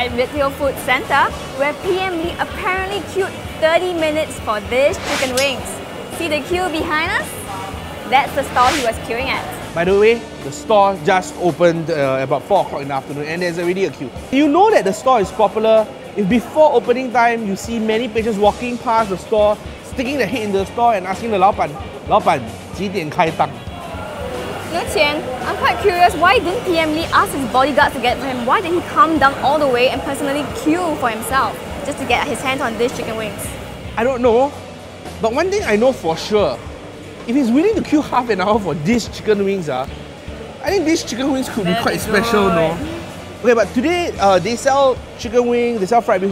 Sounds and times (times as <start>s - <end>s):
Music: 0.0s - 46.3s.